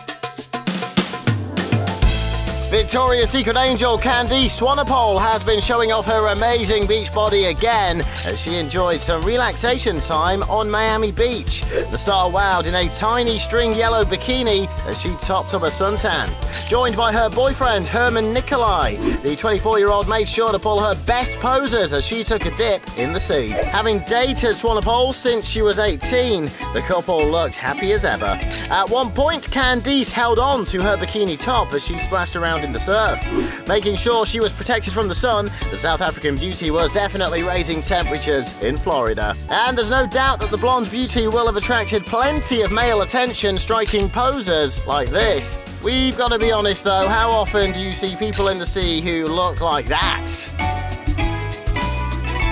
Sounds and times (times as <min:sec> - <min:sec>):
Music: 0:00.0 - 0:52.5
Speech: 0:02.7 - 0:50.5.